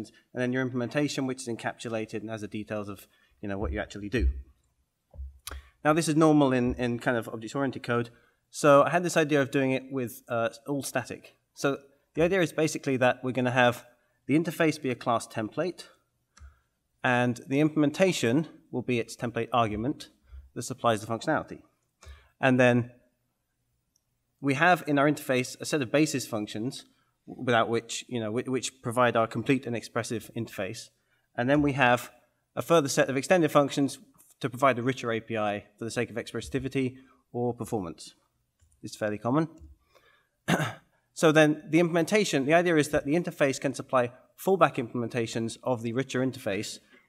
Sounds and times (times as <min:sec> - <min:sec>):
Speech: 0:00.0 - 0:04.4, 0:05.8 - 0:16.0, 0:17.0 - 0:21.7, 0:22.4 - 0:23.0, 0:24.4 - 0:38.2, 0:38.8 - 0:39.7, 0:41.2 - 0:46.8.